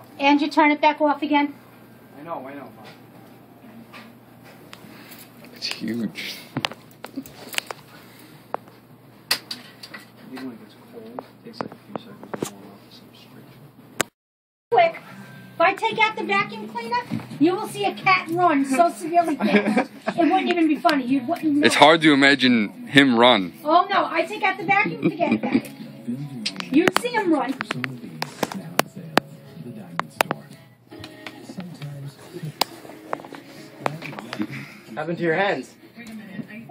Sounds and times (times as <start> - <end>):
Music: 14.7 - 36.7.